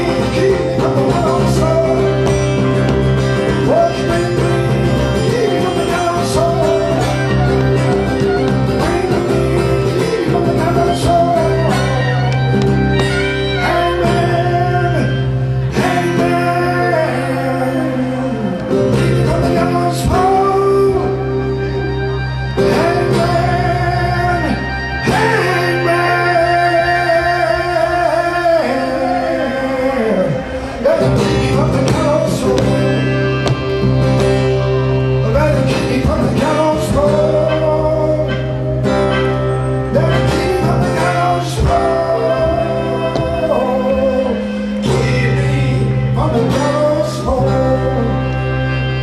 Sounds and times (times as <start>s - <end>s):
Male singing: 0.0s - 12.4s, 13.4s - 21.4s, 22.6s - 33.2s, 35.2s - 38.6s, 39.9s - 48.4s
Acoustic guitar: 0.0s - 49.0s
Blues: 0.0s - 49.0s.